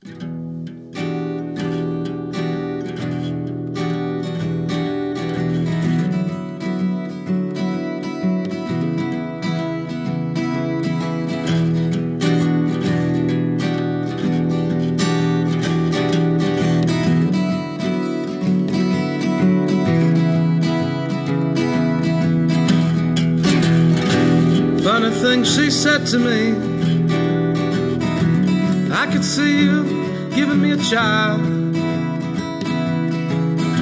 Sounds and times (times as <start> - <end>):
Music: 0.0 - 33.8.